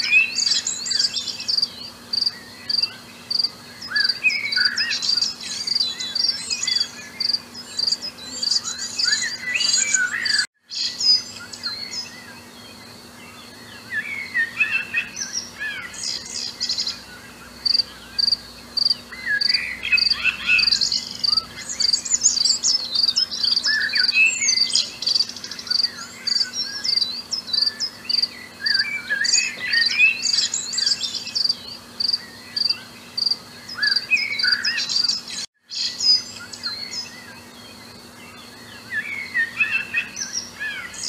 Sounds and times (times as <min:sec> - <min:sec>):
Bird: 0:00.0 - 0:41.0.